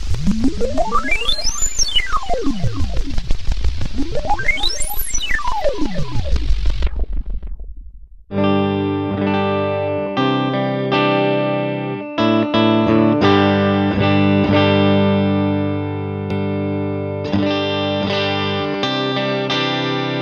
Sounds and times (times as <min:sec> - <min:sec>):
Guitar: 0:00.0 - 0:07.6, 0:08.3 - 0:20.2
Distortion: 0:00.0 - 0:20.2
Effects unit: 0:00.0 - 0:20.2.